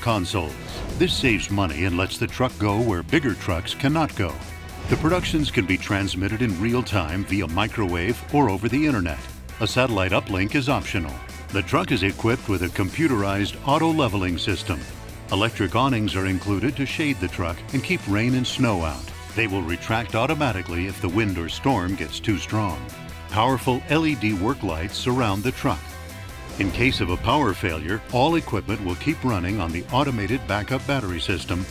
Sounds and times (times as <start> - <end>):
Speech: 0.0 - 25.9, 26.6 - 31.7
Music: 0.0 - 31.7.